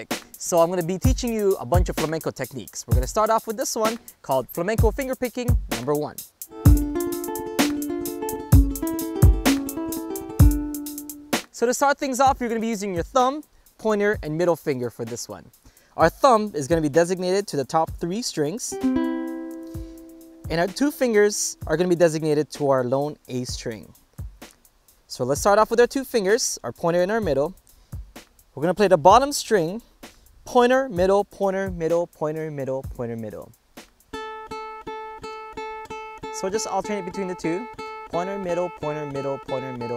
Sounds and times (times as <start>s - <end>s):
Speech: 0.0s - 6.2s, 11.6s - 18.8s, 20.5s - 24.0s, 25.1s - 27.6s, 28.6s - 29.9s, 30.5s - 33.6s, 36.4s - 39.9s
Mandolin: 6.5s - 11.2s, 18.7s - 21.4s, 34.2s - 39.9s.